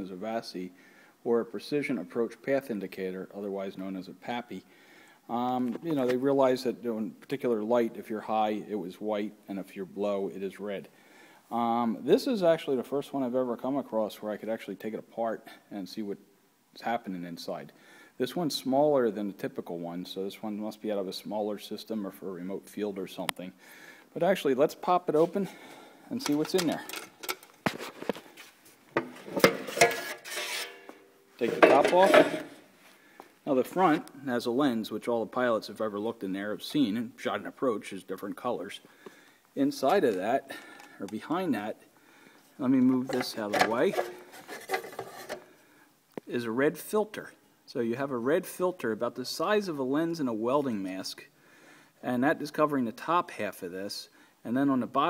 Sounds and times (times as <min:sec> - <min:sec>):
Speech: 0:00.0 - 0:04.7, 0:05.3 - 0:10.9, 0:11.5 - 0:16.2, 0:16.8 - 0:27.0, 0:31.4 - 0:32.5, 0:33.4 - 0:38.8, 0:39.6 - 0:41.8, 0:42.6 - 0:44.1, 0:46.2 - 0:51.3, 0:52.0 - 0:55.0.